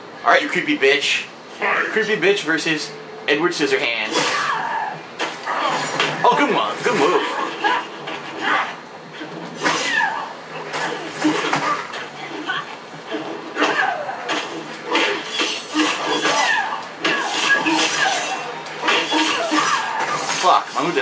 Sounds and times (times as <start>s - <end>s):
Speech: 0.2s - 4.2s, 6.2s - 7.2s, 20.4s - 21.0s.